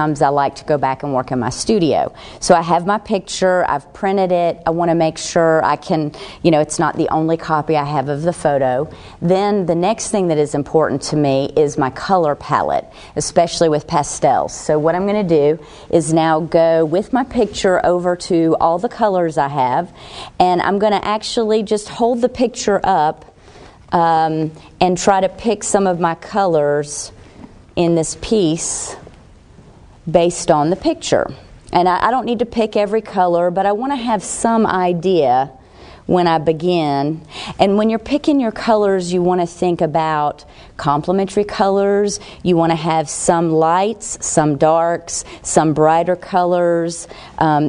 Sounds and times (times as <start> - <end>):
Speech: 0.0 - 23.2, 23.9 - 27.1, 27.8 - 29.0, 30.1 - 47.6.